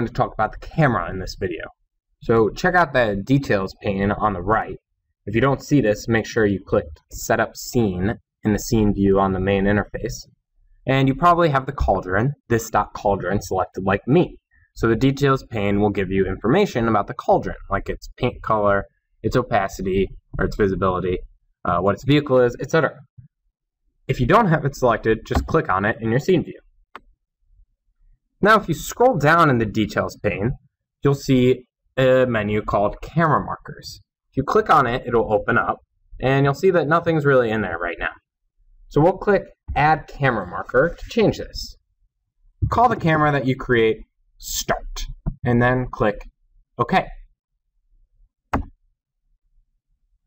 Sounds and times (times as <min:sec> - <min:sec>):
Speech: 0:00.0 - 0:10.3, 0:10.9 - 0:23.1, 0:24.1 - 0:26.6, 0:28.4 - 0:38.3, 0:38.9 - 0:41.8, 0:42.6 - 0:47.3.